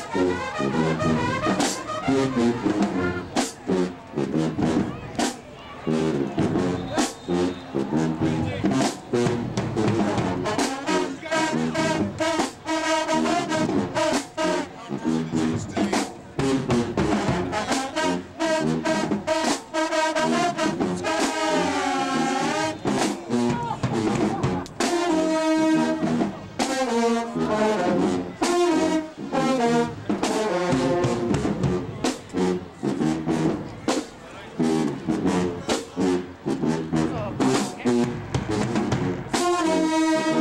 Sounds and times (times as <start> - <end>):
Music: 0.0 - 40.4
Speech: 4.7 - 7.2, 7.8 - 9.0, 10.6 - 12.4, 14.4 - 16.4, 21.0 - 24.9, 33.6 - 36.3, 36.9 - 38.2.